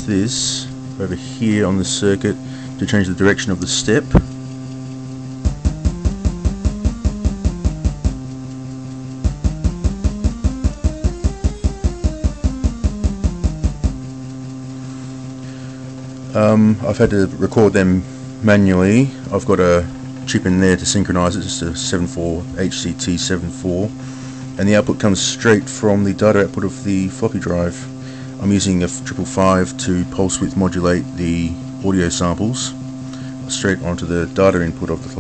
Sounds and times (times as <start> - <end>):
Speech: 0.0 - 4.3, 16.3 - 24.0, 24.6 - 32.8, 33.5 - 35.2.